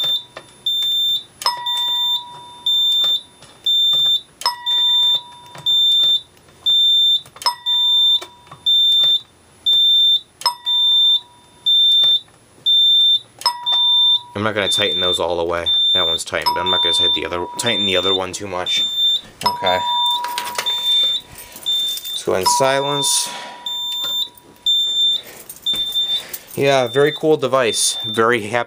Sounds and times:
Fire alarm: 0:00.0 - 0:28.6
Speech: 0:14.4 - 0:18.9, 0:22.2 - 0:23.4, 0:26.6 - 0:28.6.

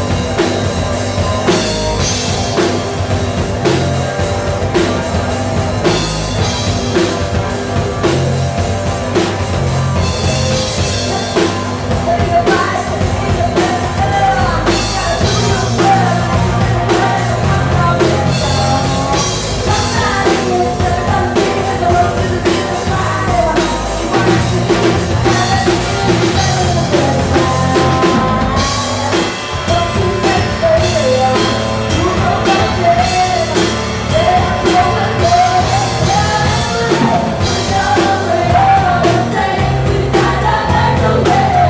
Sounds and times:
Bass drum: 0:00.0 - 0:41.6
Drum kit: 0:00.0 - 0:41.6
Guitar: 0:00.0 - 0:41.6
Heavy metal: 0:00.0 - 0:41.6.

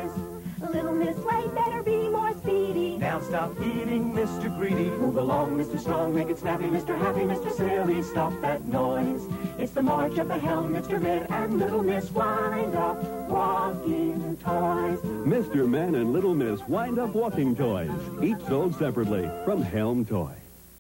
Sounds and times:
Music: 0:00.0 - 0:20.8
Speech: 0:15.3 - 0:20.5.

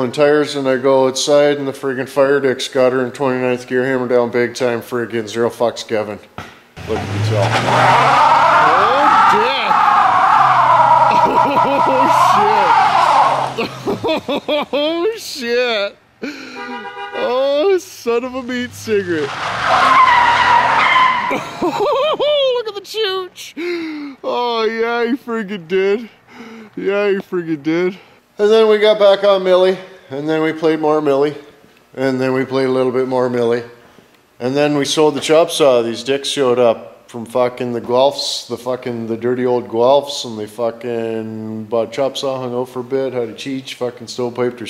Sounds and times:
Skidding: 0:06.8 - 0:15.0, 0:16.6 - 0:21.5.

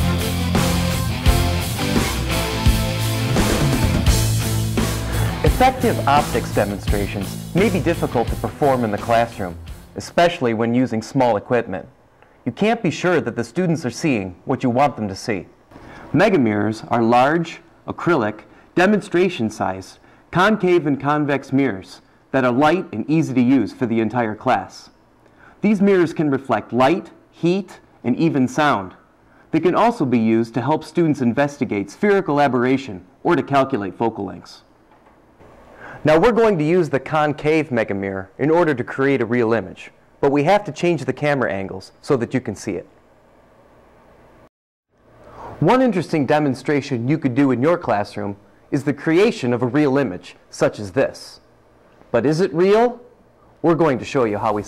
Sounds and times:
Speech: 0:05.4 - 0:15.5, 0:16.1 - 0:25.0, 0:25.6 - 0:34.7, 0:36.0 - 0:42.9, 0:45.6 - 0:51.5, 0:52.1 - 0:54.6.

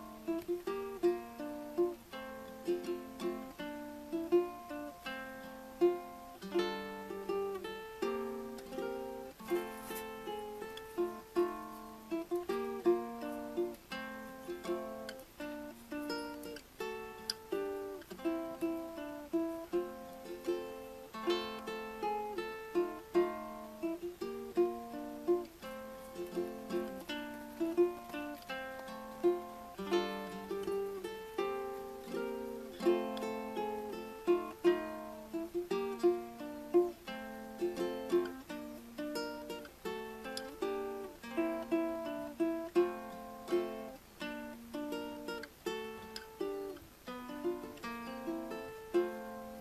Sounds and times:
Ukulele: 0:00.0 - 0:49.6.

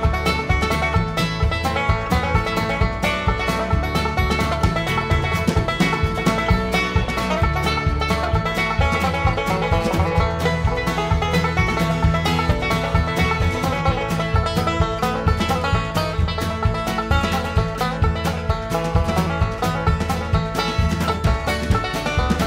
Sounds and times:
Music: 0:00.0 - 0:22.4.

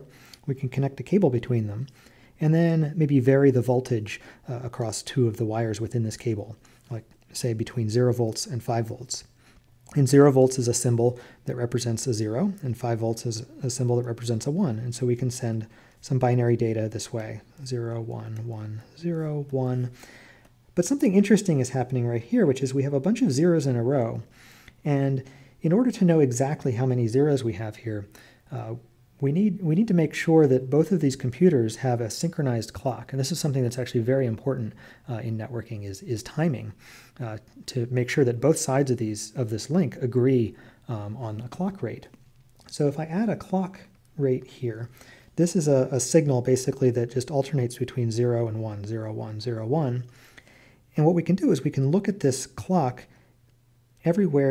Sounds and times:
Speech: 0:00.0 - 0:20.0, 0:20.7 - 0:50.1, 0:50.9 - 0:53.2, 0:54.0 - 0:54.5.

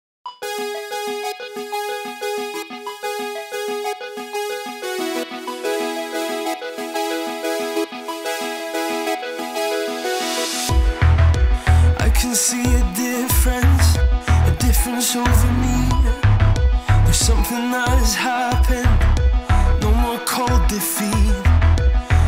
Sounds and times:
Music: 0:00.3 - 0:22.2.

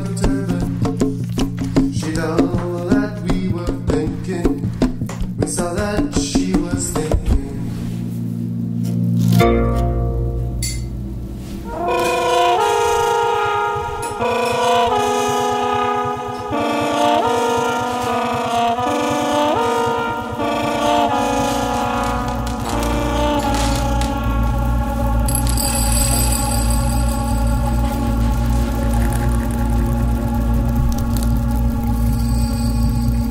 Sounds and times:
Music: 0:00.0 - 0:33.3.

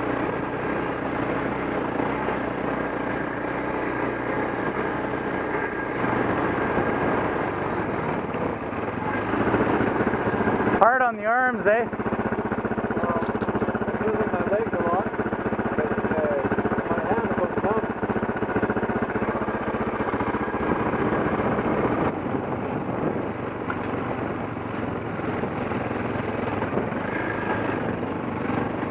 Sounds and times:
Motorcycle: 0:00.0 - 0:28.9.

